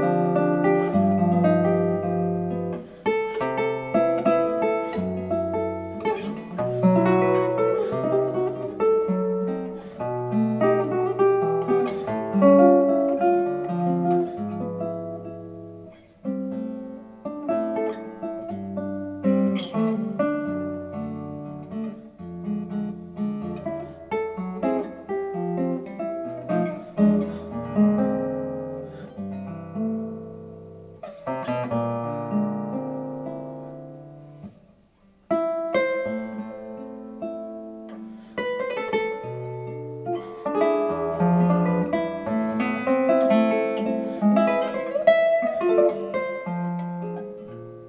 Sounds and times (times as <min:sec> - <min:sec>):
Acoustic guitar: 0:00.0 - 0:47.8
Strum: 0:00.0 - 0:47.8.